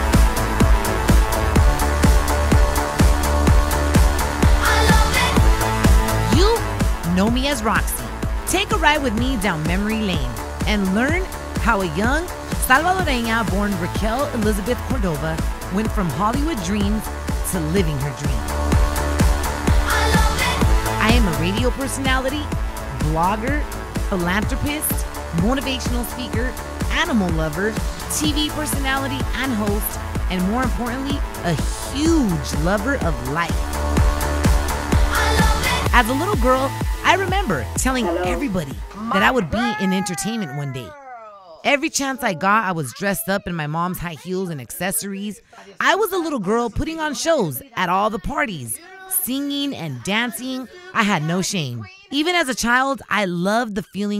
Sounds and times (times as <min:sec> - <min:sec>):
Music: 0:00.0 - 0:40.9, 0:45.7 - 0:53.2
Speech: 0:06.3 - 0:18.4, 0:21.0 - 0:33.6, 0:35.9 - 0:54.1.